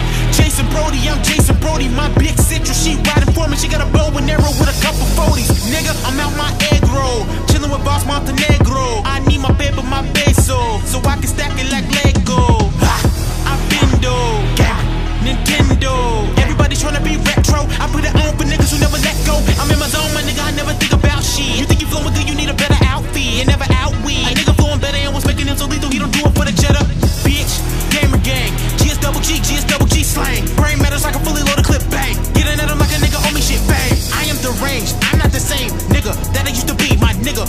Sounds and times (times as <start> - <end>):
Techno: 0.0 - 37.4.